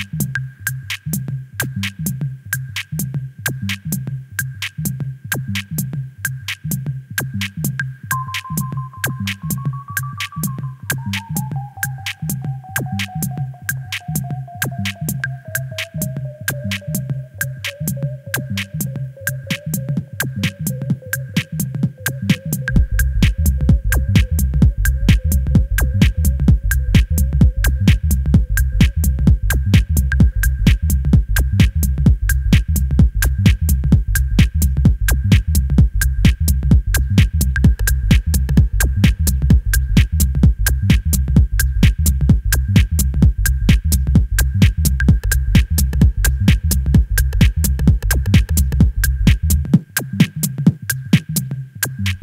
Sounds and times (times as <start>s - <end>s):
Techno: 0.0s - 52.2s.